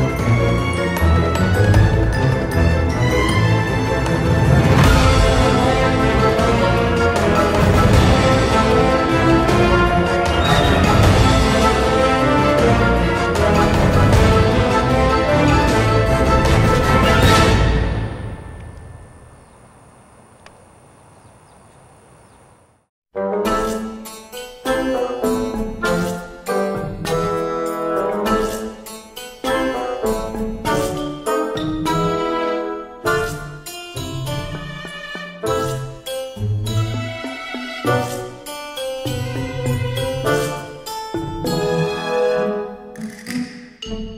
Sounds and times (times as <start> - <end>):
Outside, rural or natural: 15.6 - 22.9.